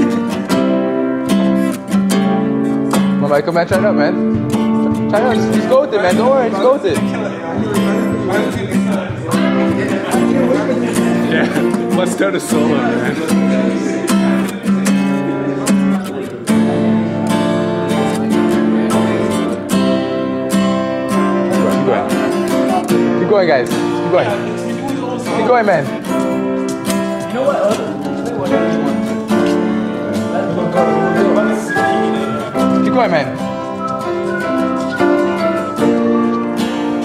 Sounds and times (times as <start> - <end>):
Music: 0.0 - 37.0
Speech: 3.2 - 4.2, 5.1 - 19.7, 21.2 - 26.2, 27.2 - 33.4.